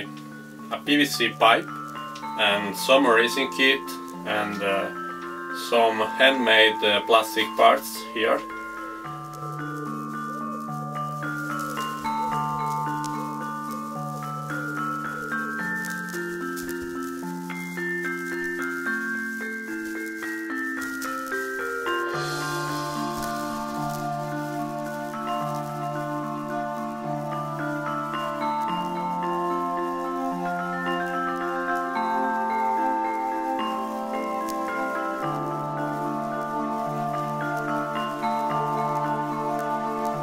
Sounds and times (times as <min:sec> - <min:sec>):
Music: 0:00.0 - 0:40.2.